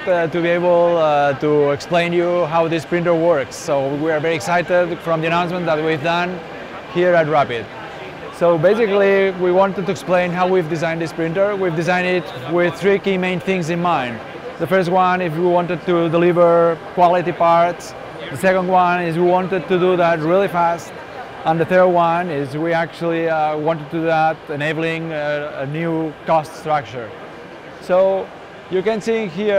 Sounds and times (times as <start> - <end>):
Speech: 0.0 - 27.1, 27.8 - 29.5.